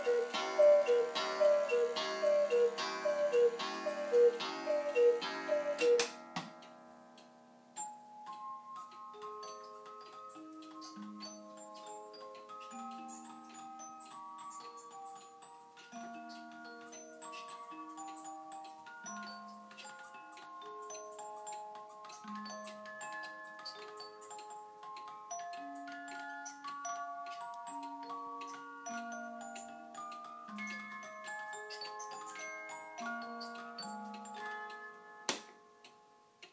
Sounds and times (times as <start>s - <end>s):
Chime: 0.0s - 36.5s.